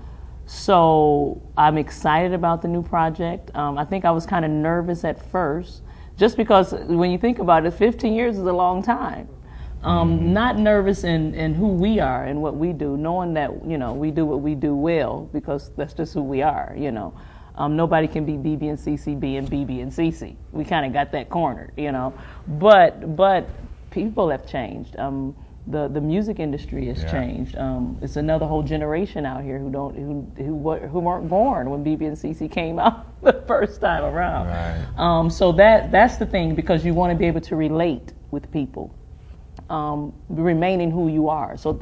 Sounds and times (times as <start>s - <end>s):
Speech: 0.5s - 38.9s, 39.7s - 41.8s.